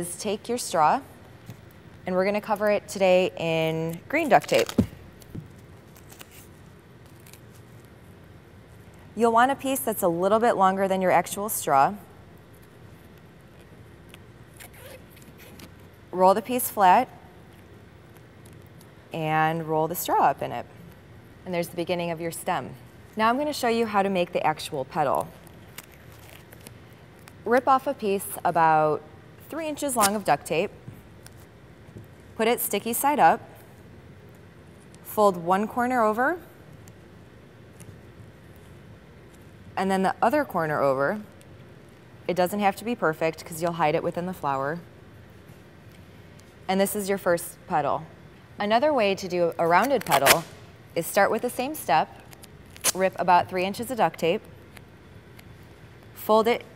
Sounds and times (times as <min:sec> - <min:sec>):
Speech: 0:02.1 - 0:04.7, 0:19.2 - 0:20.7, 0:21.5 - 0:25.4, 0:27.5 - 0:30.7, 0:39.8 - 0:41.3, 0:42.3 - 0:44.8, 0:46.7 - 0:50.4, 0:51.0 - 0:52.2, 0:53.0 - 0:54.5, 0:56.2 - 0:56.7.